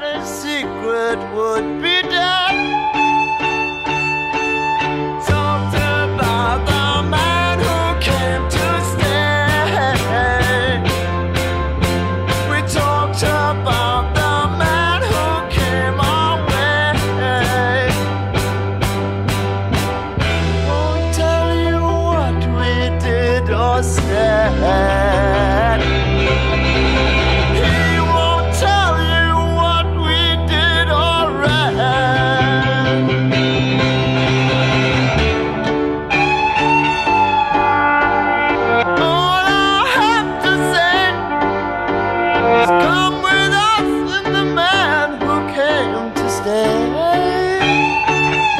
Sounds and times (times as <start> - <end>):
Music: 0.0 - 48.6.